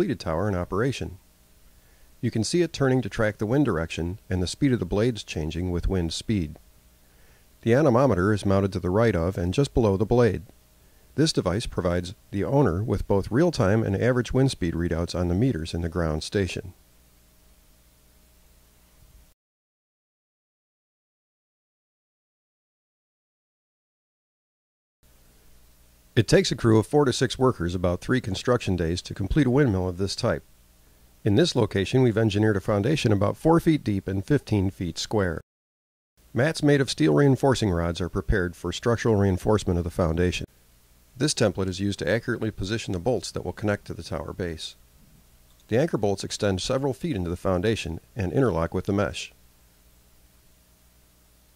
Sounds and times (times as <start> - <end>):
Speech: 0.0 - 1.2, 2.2 - 6.6, 7.6 - 10.5, 11.2 - 16.8, 26.2 - 30.5, 31.2 - 35.4, 36.4 - 40.5, 41.2 - 44.8, 45.6 - 49.4.